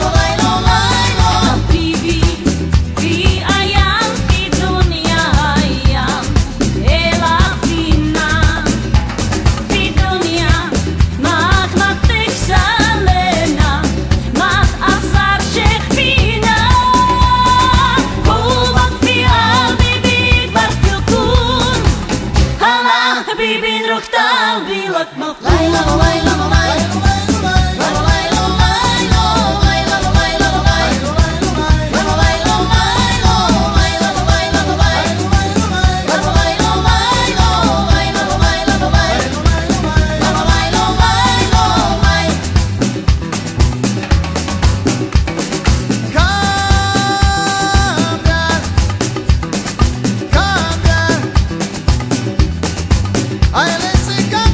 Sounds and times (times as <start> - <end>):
Singing: 0.0 - 8.8, 9.8 - 42.6, 46.1 - 48.7, 50.3 - 51.4
Music of Latin America: 0.0 - 54.5.